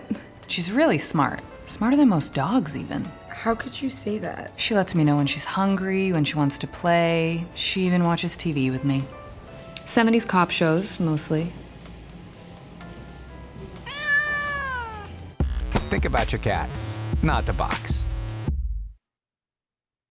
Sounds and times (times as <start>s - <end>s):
Music: 0.0s - 19.0s
Meow: 13.8s - 15.2s
Speech: 15.8s - 18.0s.